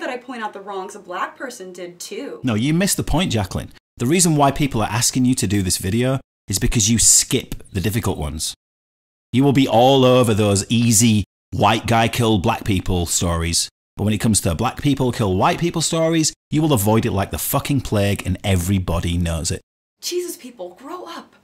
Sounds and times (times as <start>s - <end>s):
Speech: 0.0s - 8.6s, 9.4s - 21.4s.